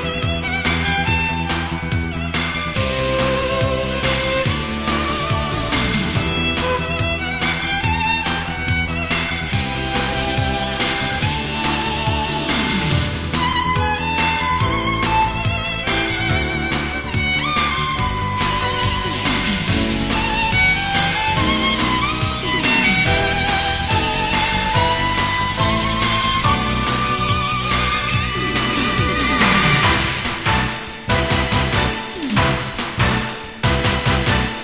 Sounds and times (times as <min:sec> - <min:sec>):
Violin, fiddle: 0:00.0 - 0:34.6.